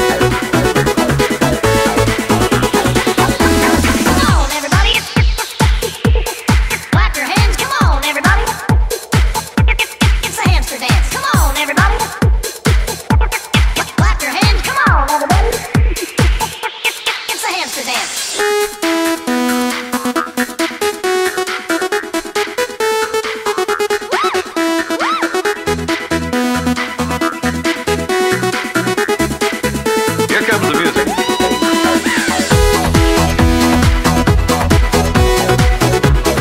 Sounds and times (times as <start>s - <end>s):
Techno: 0.0s - 36.4s.